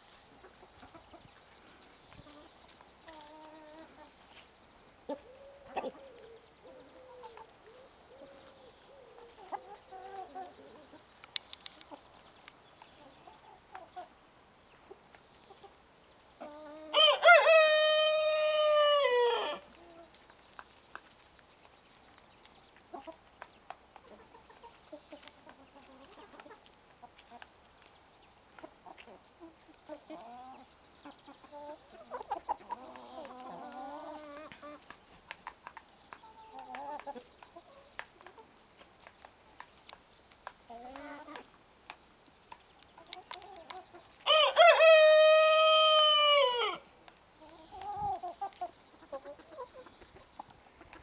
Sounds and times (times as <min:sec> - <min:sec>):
Bird: 0:00.0 - 0:17.6, 0:18.7 - 0:51.0
Chicken, rooster: 0:00.1 - 0:01.5, 0:02.1 - 0:12.2, 0:16.4 - 0:21.2, 0:24.0 - 0:27.5, 0:28.6 - 0:39.9, 0:40.7 - 0:41.6, 0:43.0 - 0:51.0.